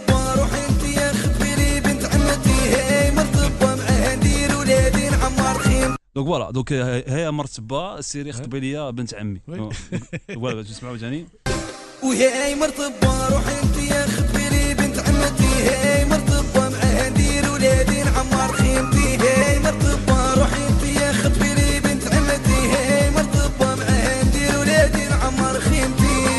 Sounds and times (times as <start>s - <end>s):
Music: 0.0s - 6.0s, 11.5s - 26.3s
Speech: 6.2s - 11.4s.